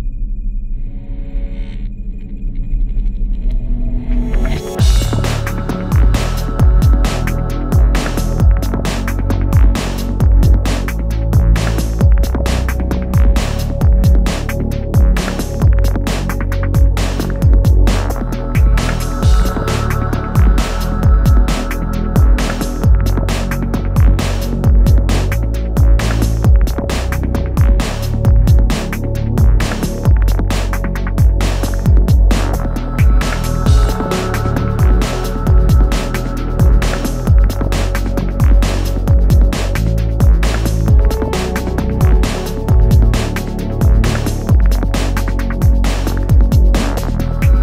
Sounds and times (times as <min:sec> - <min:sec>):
Music: 0:00.0 - 0:47.6.